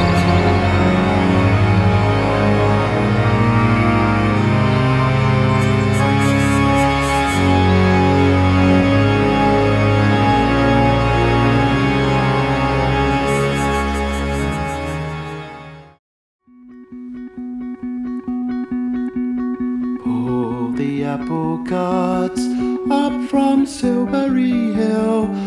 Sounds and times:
Sampler: 0.0s - 15.8s.

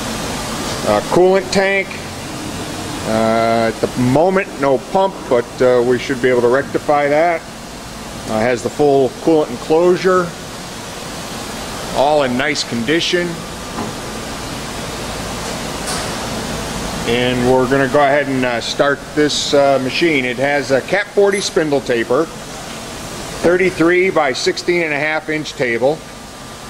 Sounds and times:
Speech: 0.8s - 2.1s, 3.1s - 7.5s, 8.3s - 10.4s, 11.9s - 13.4s, 17.1s - 22.4s, 23.4s - 26.0s.

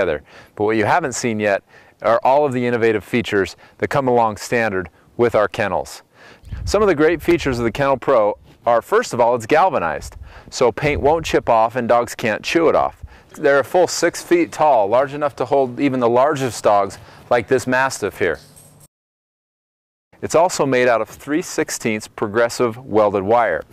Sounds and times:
Speech: 0.0s - 6.0s, 6.6s - 18.4s, 20.2s - 23.7s.

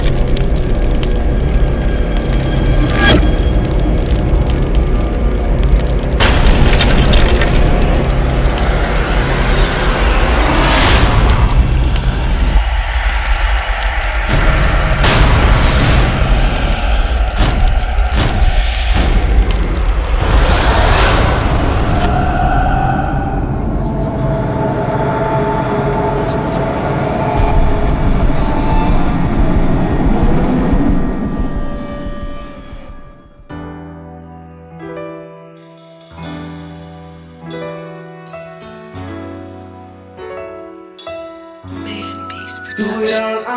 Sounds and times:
Music: 0.0s - 43.5s.

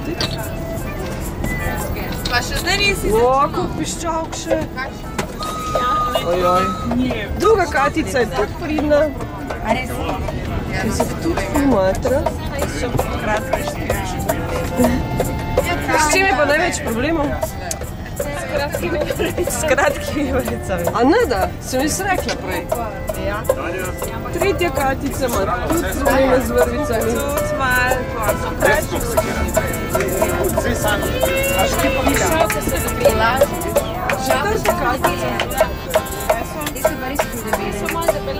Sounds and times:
Music: 0.0s - 38.3s
Speech: 1.5s - 38.3s.

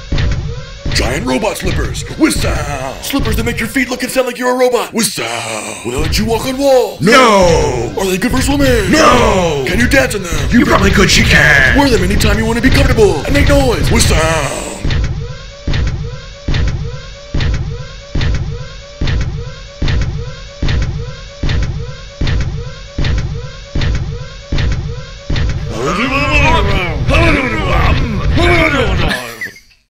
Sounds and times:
Speech: 1.0s - 14.8s, 25.7s - 29.6s.

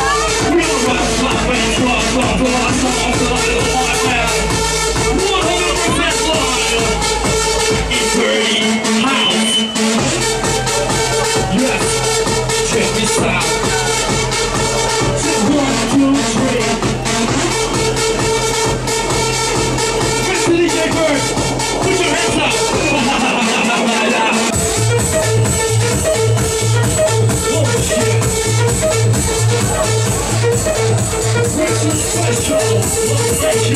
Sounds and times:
Music: 0.0s - 33.7s.

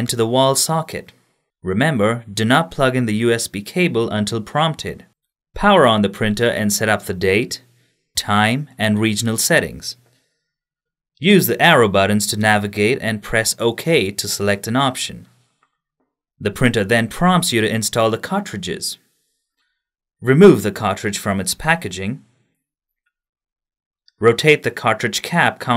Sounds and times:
Speech: 0.0s - 10.0s, 11.2s - 15.3s, 16.4s - 19.0s, 20.2s - 22.3s, 24.2s - 25.7s.

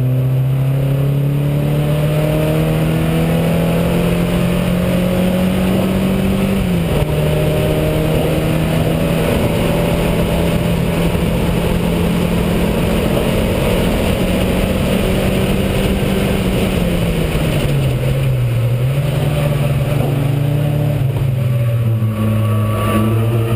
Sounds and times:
Car: 0.0s - 23.5s.

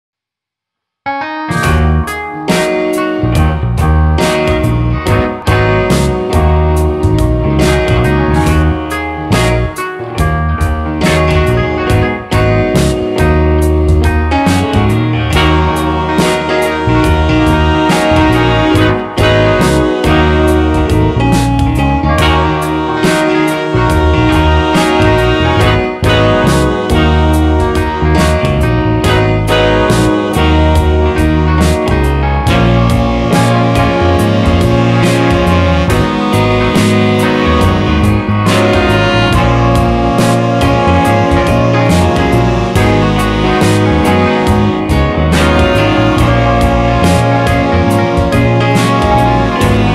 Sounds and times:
Music: 0.8s - 49.9s.

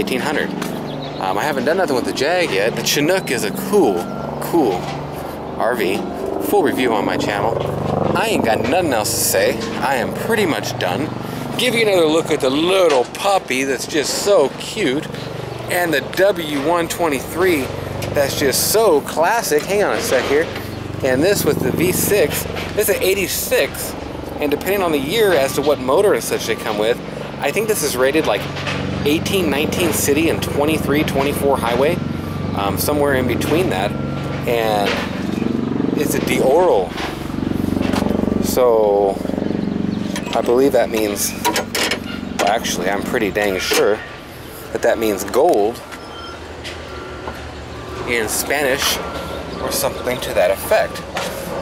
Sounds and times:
Speech: 0.0s - 0.5s, 1.2s - 4.9s, 5.6s - 15.1s, 15.7s - 32.0s, 32.6s - 35.0s, 36.0s - 36.9s, 38.4s - 39.2s, 40.3s - 41.4s, 42.4s - 44.0s, 44.7s - 45.8s, 48.1s - 49.0s, 49.6s - 51.0s
Outside, urban or manmade: 0.0s - 51.6s.

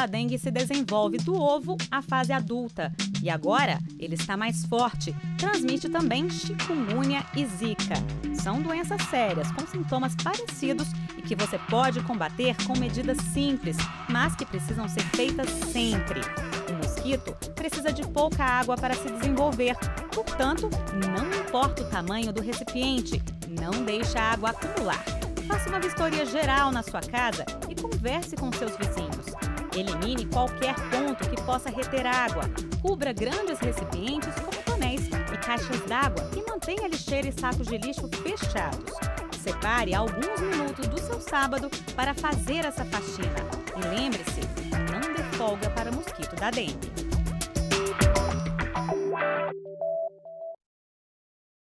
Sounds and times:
Speech: 0.0s - 46.8s
Music: 0.0s - 50.6s.

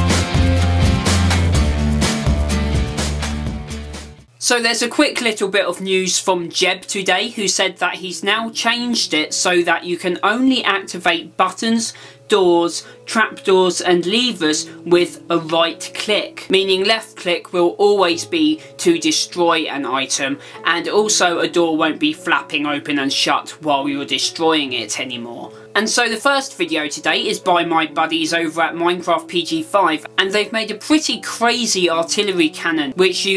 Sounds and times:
Inside, small room: 0.0s - 33.3s
Music: 0.0s - 33.3s
Speech: 4.4s - 33.3s.

